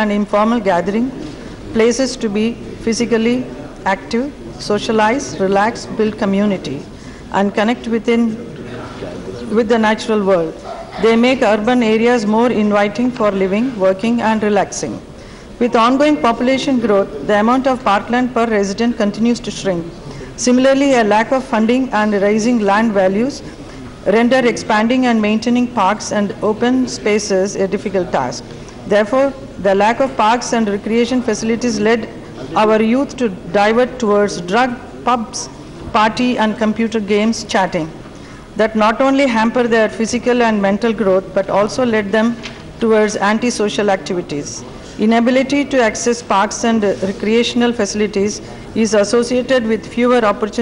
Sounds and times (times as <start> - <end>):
Female speech, woman speaking: 0.0 - 8.4, 9.4 - 15.0, 15.6 - 23.4, 24.0 - 38.0, 38.6 - 50.6
Narration, monologue: 0.0 - 50.6.